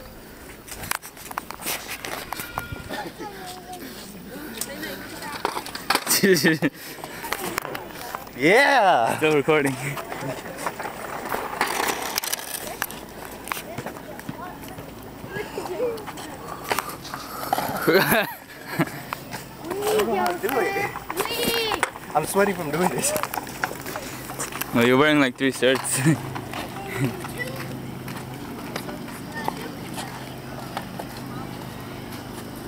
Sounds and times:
Child speech, kid speaking: 2.8 - 5.6, 13.6 - 16.6, 19.6 - 23.2, 26.6 - 27.9, 28.6 - 32.1.

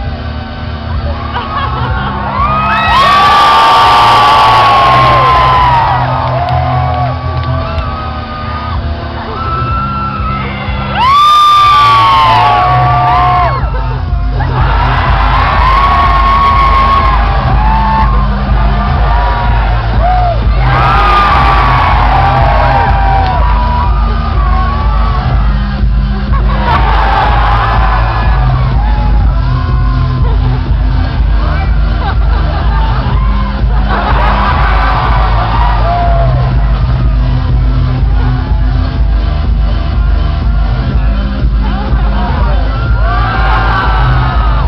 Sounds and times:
Dance music: 0.0 - 44.6.

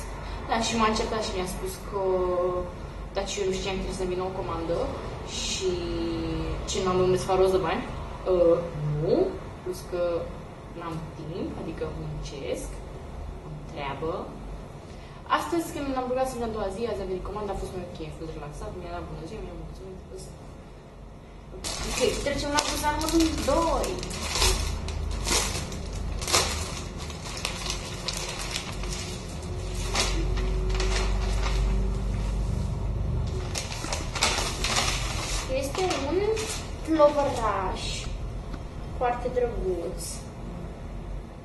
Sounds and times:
Speech: 0.0 - 12.8, 13.5 - 14.4, 15.3 - 20.4, 21.8 - 24.1, 35.5 - 38.2, 39.0 - 40.4.

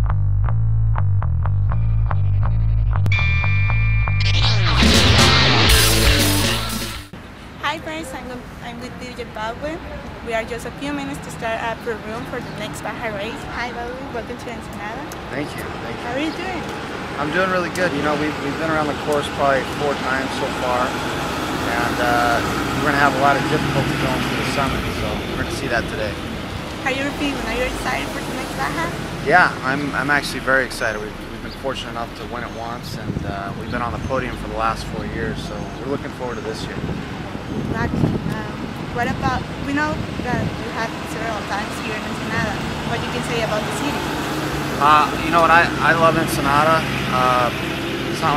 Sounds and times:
Outside, urban or manmade: 0.0 - 48.3
Vehicle: 6.9 - 48.3
Speech: 7.6 - 16.6, 17.2 - 20.9, 21.7 - 26.2, 26.9 - 36.8, 37.8 - 44.0, 44.8 - 48.3.

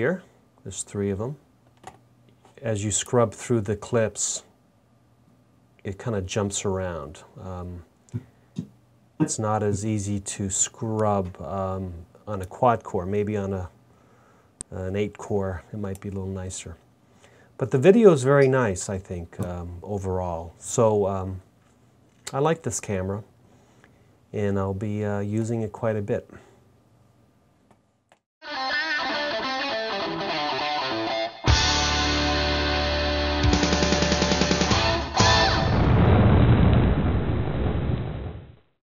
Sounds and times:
Music: 28.4 - 35.8.

